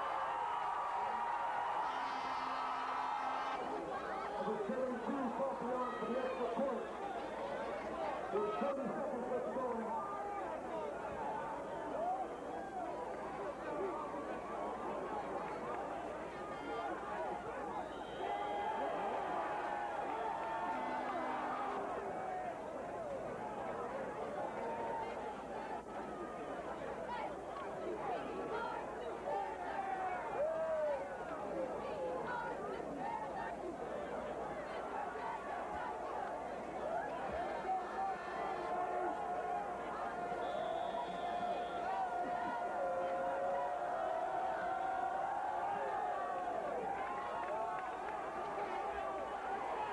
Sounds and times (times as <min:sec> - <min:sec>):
Speech: 0:03.6 - 0:19.2, 0:20.1 - 0:49.9.